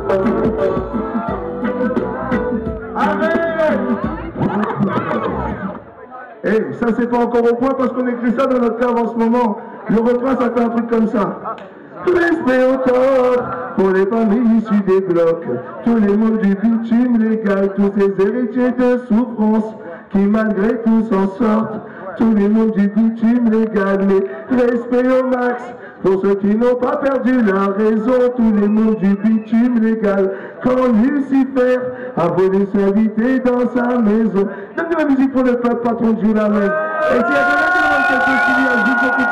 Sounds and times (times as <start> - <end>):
Speech: 3.0 - 39.3.